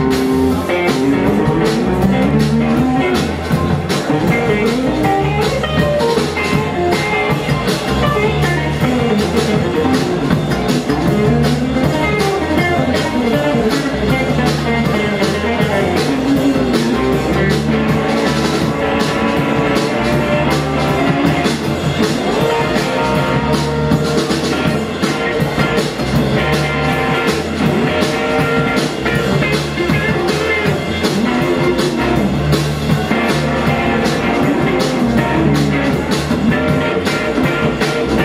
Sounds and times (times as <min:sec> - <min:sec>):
Drum: 0:00.0 - 0:38.2
Guitar: 0:00.0 - 0:38.2.